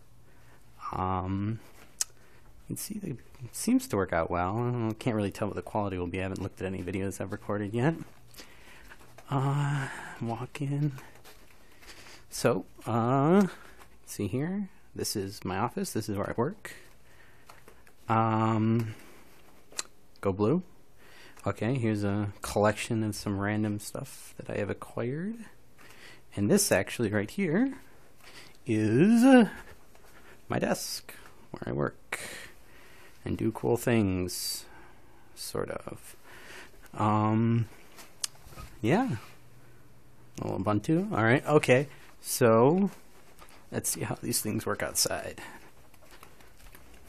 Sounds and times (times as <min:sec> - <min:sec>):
Speech: 0:00.8 - 0:01.7, 0:02.7 - 0:08.2, 0:09.2 - 0:11.2, 0:12.3 - 0:16.9, 0:18.1 - 0:19.0, 0:20.2 - 0:20.7, 0:21.4 - 0:25.6, 0:26.3 - 0:27.9, 0:28.6 - 0:29.8, 0:30.5 - 0:32.5, 0:33.2 - 0:34.8, 0:35.4 - 0:36.2, 0:36.9 - 0:37.7, 0:38.8 - 0:39.4, 0:40.4 - 0:43.0, 0:43.7 - 0:45.6.